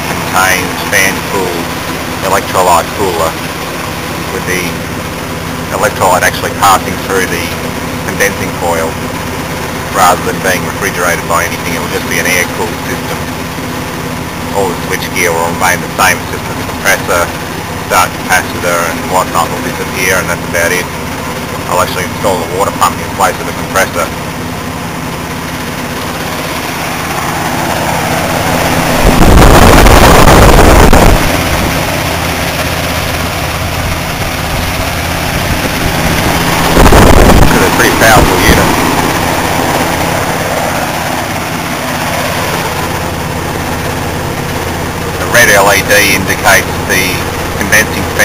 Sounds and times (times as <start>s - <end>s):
Air conditioning: 0.0s - 48.2s.